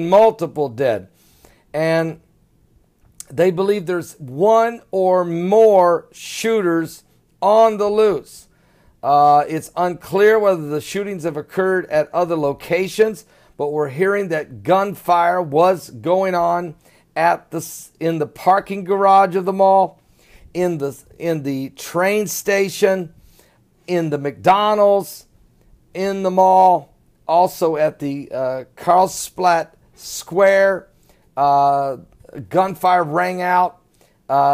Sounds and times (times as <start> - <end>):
Speech: 0.0 - 1.1, 1.8 - 2.2, 3.2 - 20.0, 20.6 - 23.1, 23.9 - 25.3, 26.0 - 34.5.